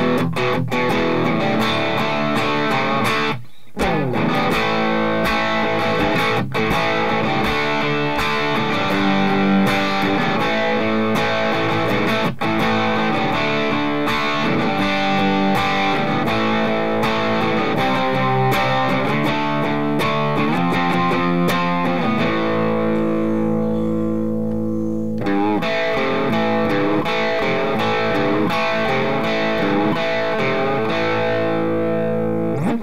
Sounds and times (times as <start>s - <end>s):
Acoustic guitar: 0.0s - 32.8s
Strum: 0.0s - 32.8s.